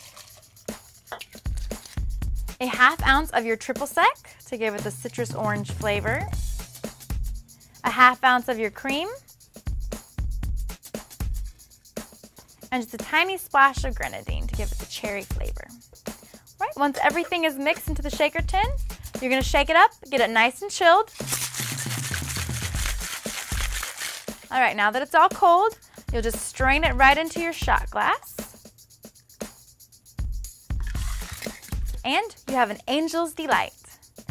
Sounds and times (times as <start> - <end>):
Music: 0.0 - 34.3
Speech: 2.6 - 6.3, 7.8 - 9.2, 12.7 - 15.7, 16.6 - 21.1, 24.5 - 28.4, 32.0 - 33.9.